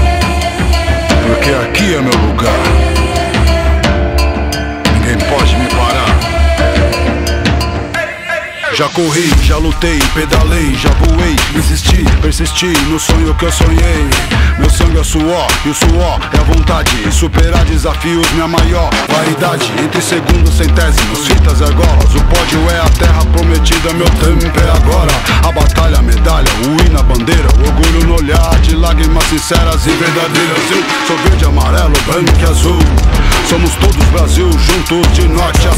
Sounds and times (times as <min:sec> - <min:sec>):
Music: 0:00.0 - 0:35.7.